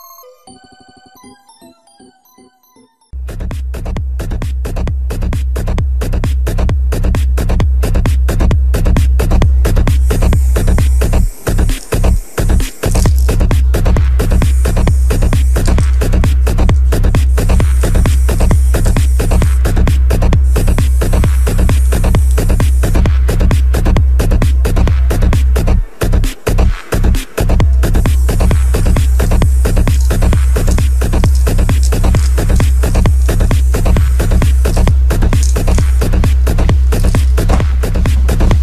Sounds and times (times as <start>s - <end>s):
Music: 0.0s - 38.6s
Spray: 4.6s - 38.6s.